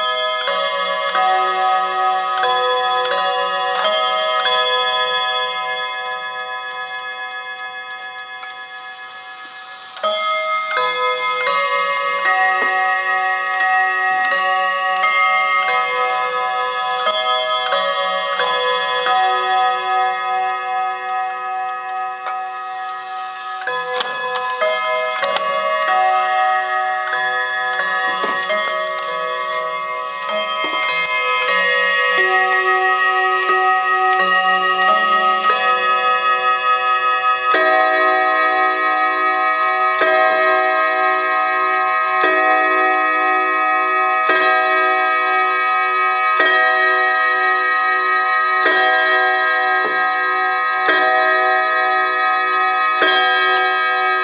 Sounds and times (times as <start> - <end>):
Tick-tock: 6.7 - 16.1, 20.4 - 26.2.